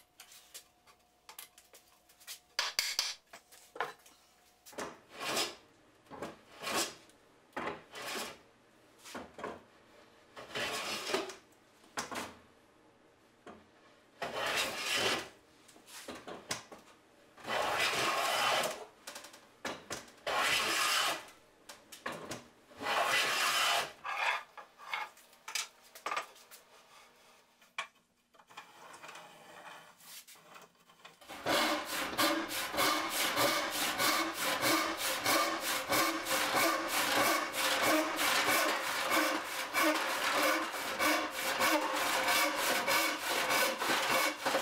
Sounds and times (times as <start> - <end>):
Sawing: 5.1 - 5.6, 6.5 - 7.1, 7.9 - 8.4, 10.4 - 11.3, 14.2 - 15.4, 17.4 - 18.8, 20.3 - 21.3, 22.8 - 25.1, 28.6 - 44.6
Wood: 27.6 - 44.6
Rub: 29.4 - 30.6.